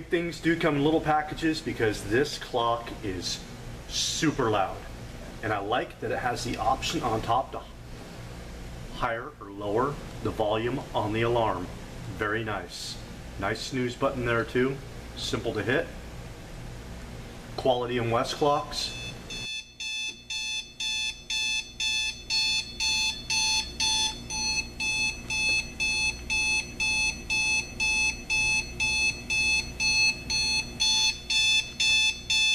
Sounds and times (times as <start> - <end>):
Alarm clock: 19.0 - 32.5.